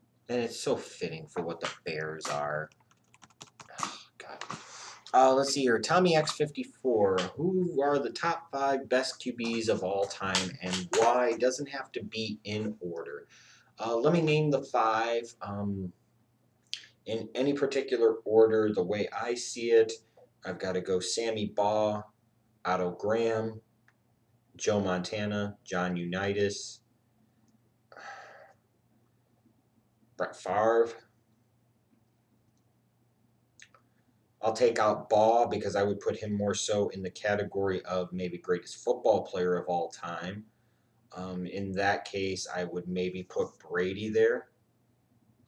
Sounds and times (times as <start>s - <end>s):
Computer keyboard: 1.7s - 4.6s.